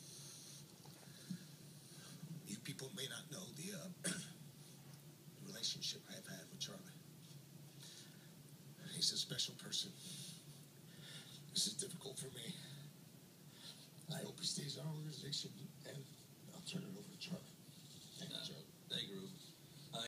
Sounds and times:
Speech: 0:02.4 - 0:04.1, 0:05.4 - 0:07.0, 0:08.8 - 0:10.0, 0:11.5 - 0:12.9, 0:14.1 - 0:20.0.

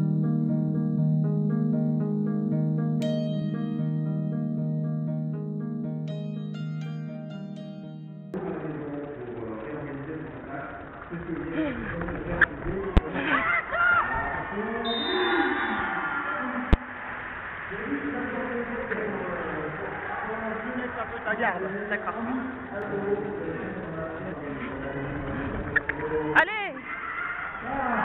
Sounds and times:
Speech: 0:08.4 - 0:13.4, 0:17.7 - 0:25.4, 0:26.3 - 0:26.8.

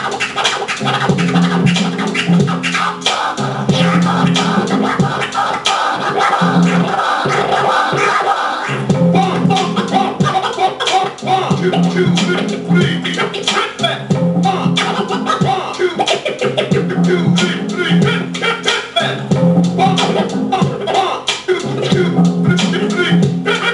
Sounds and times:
Hip hop music: 0:00.0 - 0:23.7
Scratching (performance technique): 0:00.0 - 0:23.7.

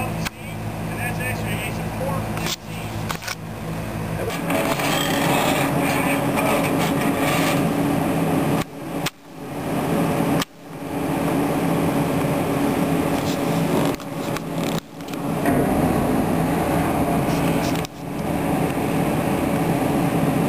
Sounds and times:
Wind: 0:00.0 - 0:20.4.

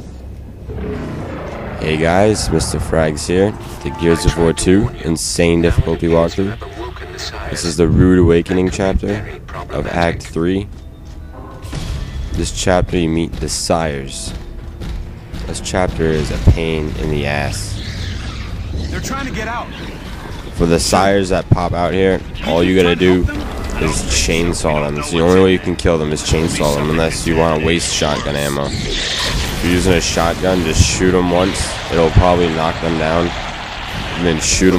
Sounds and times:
Speech: 0:01.8 - 0:10.7, 0:12.4 - 0:14.3, 0:15.4 - 0:17.8, 0:20.6 - 0:28.8, 0:29.6 - 0:33.3, 0:34.2 - 0:34.7.

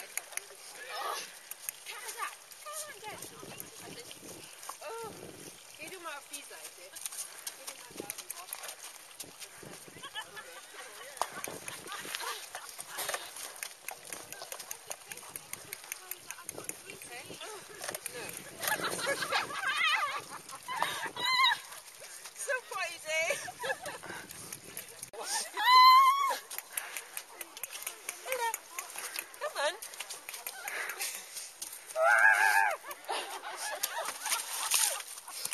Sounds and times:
Horse: 0:00.0 - 0:35.5
Outside, rural or natural: 0:00.0 - 0:35.5.

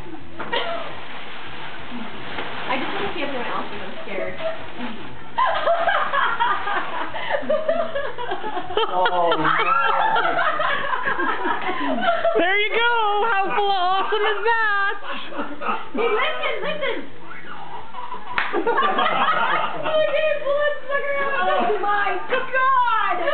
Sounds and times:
Giggle: 0:05.4 - 0:12.4, 0:18.0 - 0:20.4.

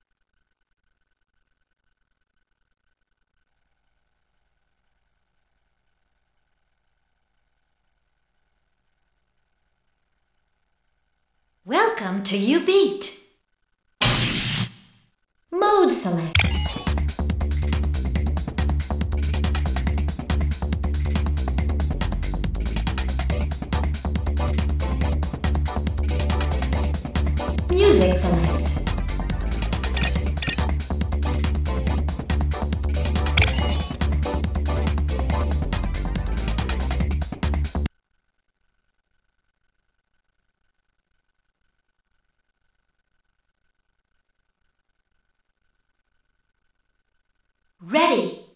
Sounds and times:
Speech: 0:11.7 - 0:13.2, 0:15.6 - 0:16.4, 0:27.7 - 0:28.9, 0:47.8 - 0:48.5
Music: 0:16.4 - 0:37.9.

